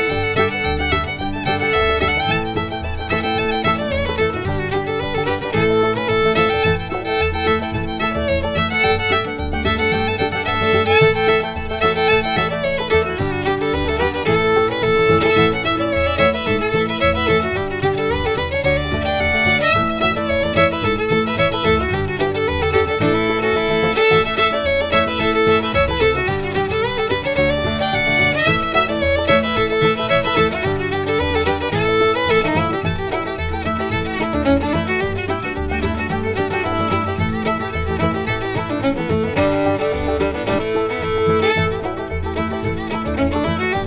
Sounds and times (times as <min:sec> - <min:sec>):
Violin, fiddle: 0:00.0 - 0:43.8.